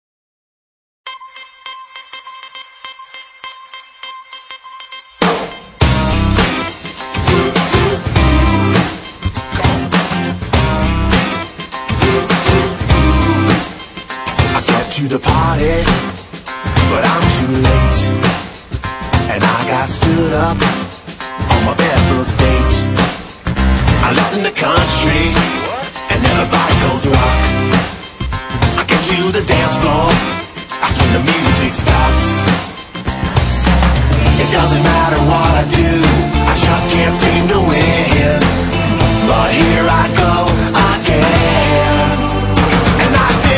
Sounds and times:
Music: 0:01.1 - 0:43.5.

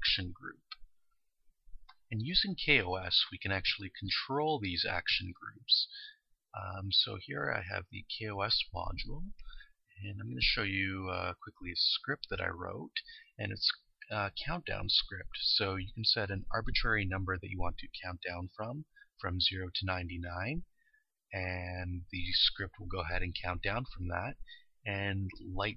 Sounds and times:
Speech: 0:00.0 - 0:00.8, 0:02.1 - 0:09.4, 0:10.0 - 0:20.7, 0:21.3 - 0:25.7.

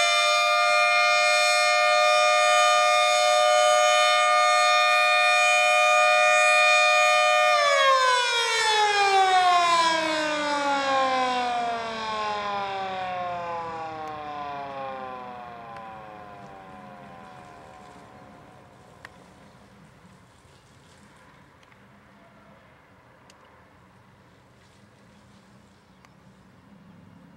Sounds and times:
Civil defense siren: 0:00.0 - 0:19.7.

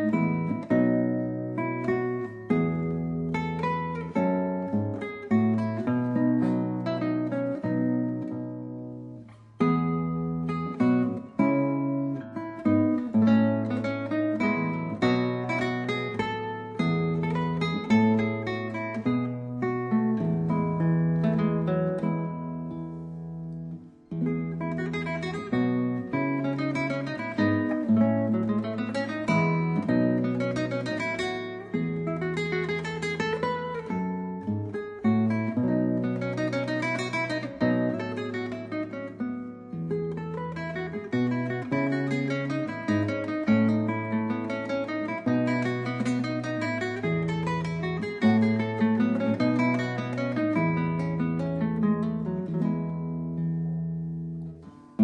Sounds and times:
Music: 0:00.0 - 0:55.0.

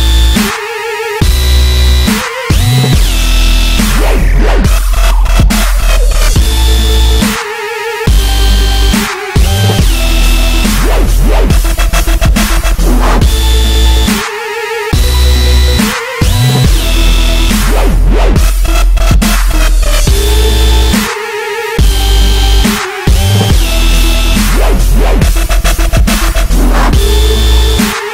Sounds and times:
Dubstep: 0:00.0 - 0:28.1.

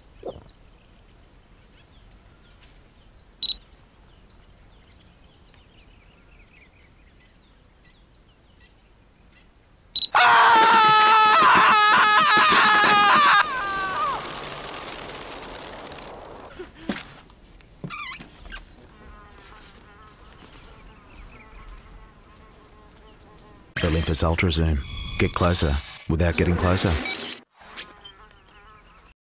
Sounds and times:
Speech: 0:23.8 - 0:27.0.

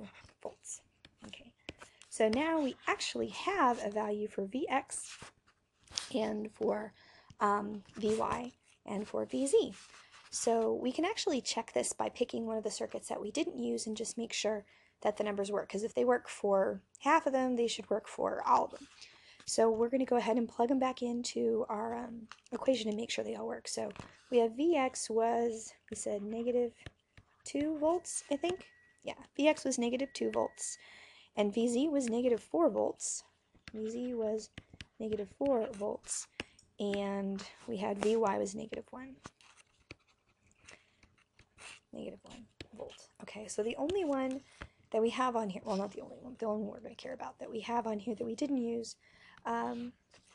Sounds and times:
Speech: 0:00.0 - 0:01.5, 0:02.1 - 0:05.1, 0:06.0 - 0:09.8, 0:10.4 - 0:18.9, 0:19.5 - 0:26.8, 0:27.4 - 0:30.8, 0:31.4 - 0:39.2, 0:42.0 - 0:44.4, 0:45.0 - 0:50.0
Inside, small room: 0:00.0 - 0:50.3.

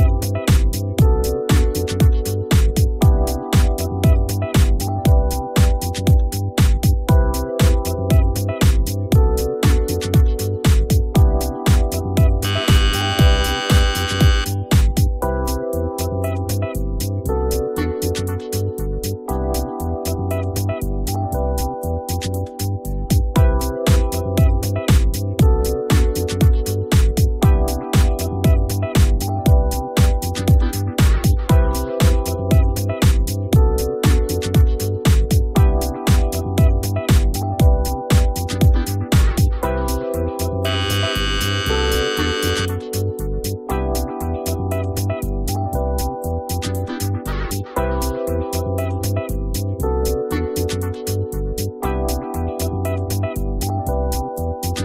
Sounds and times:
Music: 0:00.0 - 0:54.8.

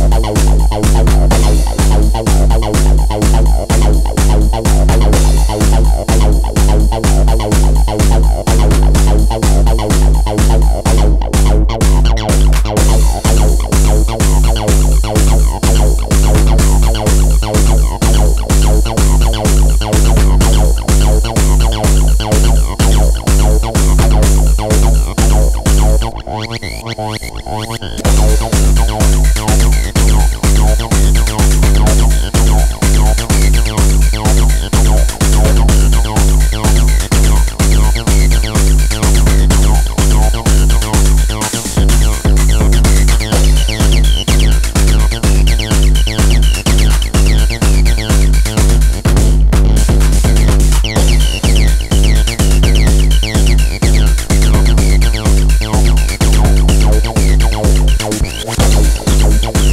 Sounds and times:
Drum machine: 0:00.0 - 0:59.7
Electronic music: 0:00.0 - 0:59.7.

